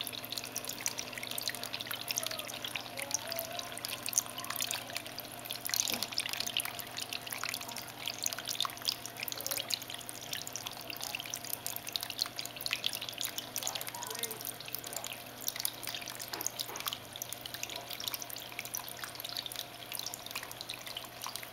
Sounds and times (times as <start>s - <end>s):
Speech: 2.1s - 5.1s, 13.6s - 15.2s.